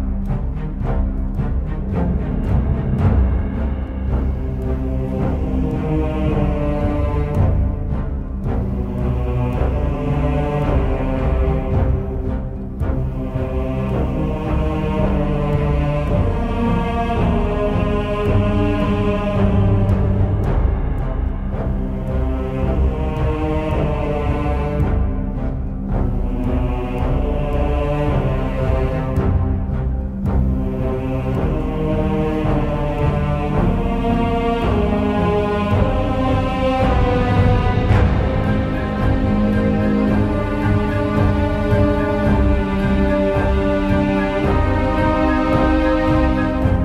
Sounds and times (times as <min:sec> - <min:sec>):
Background music: 0:00.0 - 0:46.8.